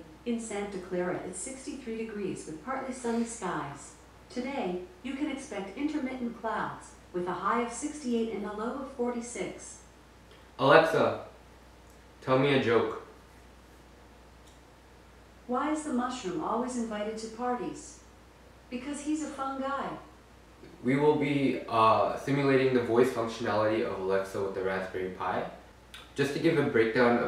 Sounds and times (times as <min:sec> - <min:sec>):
Speech: 0:00.0 - 0:09.8, 0:10.6 - 0:11.3, 0:12.2 - 0:13.1, 0:15.5 - 0:18.0, 0:18.7 - 0:27.2.